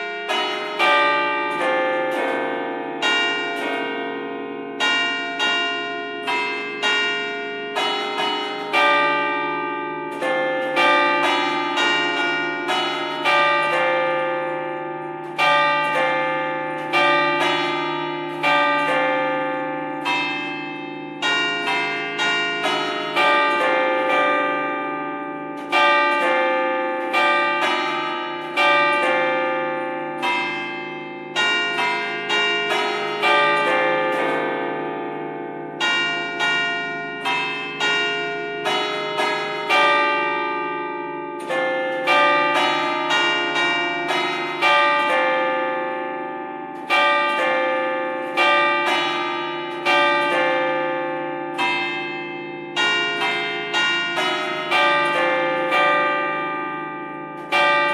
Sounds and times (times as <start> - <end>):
Church bell: 0.0 - 57.9.